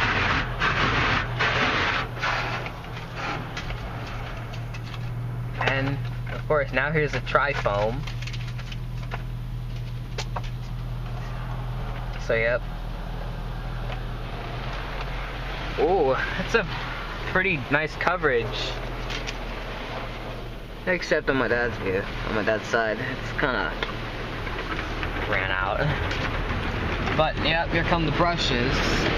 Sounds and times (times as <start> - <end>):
Vehicle: 0.0 - 29.1
Speech: 5.6 - 8.0, 15.8 - 18.8, 20.9 - 23.8, 25.3 - 26.0, 27.2 - 29.1.